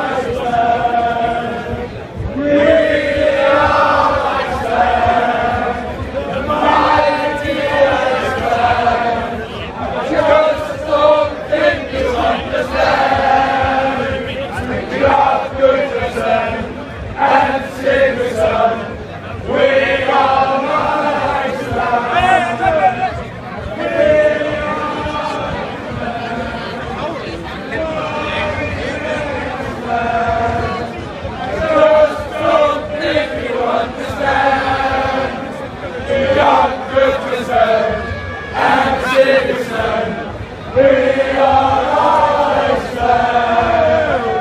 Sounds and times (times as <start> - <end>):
Male singing: 0.0 - 27.1, 27.7 - 44.4
Choir: 0.0 - 44.4.